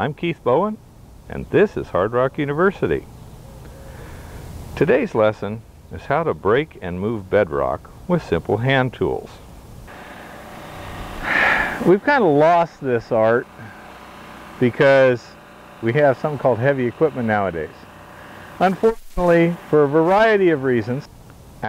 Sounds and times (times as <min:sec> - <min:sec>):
Speech: 0:00.0 - 0:03.1, 0:04.8 - 0:09.4, 0:11.8 - 0:13.6, 0:14.6 - 0:17.8, 0:18.6 - 0:21.6.